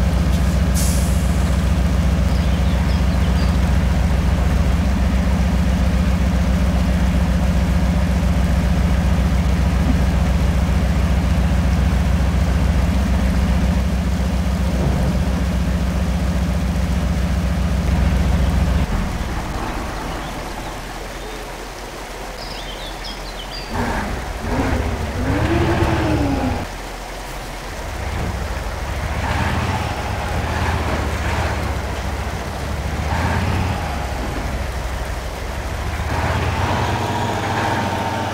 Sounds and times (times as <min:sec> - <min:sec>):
Outside, urban or manmade: 0:00.0 - 0:38.3
Truck: 0:00.0 - 0:38.3.